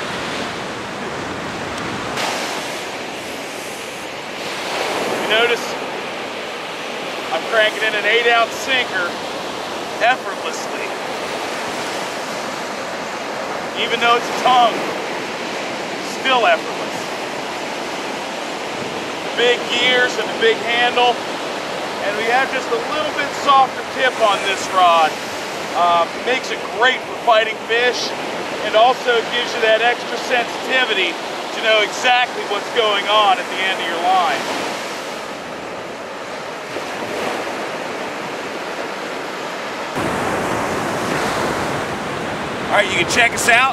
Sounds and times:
Waves, surf: 0:00.0 - 0:43.7
Speech: 0:05.2 - 0:05.8, 0:07.3 - 0:09.2, 0:10.0 - 0:11.0, 0:13.8 - 0:14.8, 0:16.0 - 0:17.1, 0:19.4 - 0:21.2, 0:22.0 - 0:25.2, 0:25.8 - 0:34.5, 0:42.7 - 0:43.7.

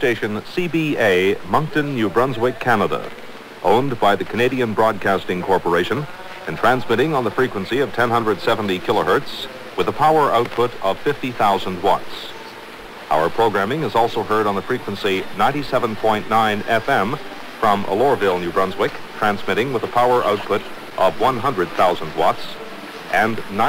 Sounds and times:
Speech: 0:00.0 - 0:23.6.

